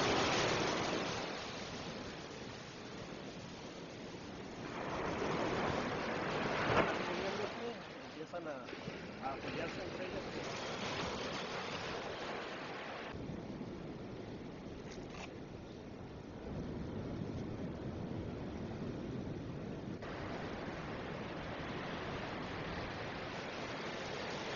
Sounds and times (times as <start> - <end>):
Waves, surf: 0.0 - 24.5.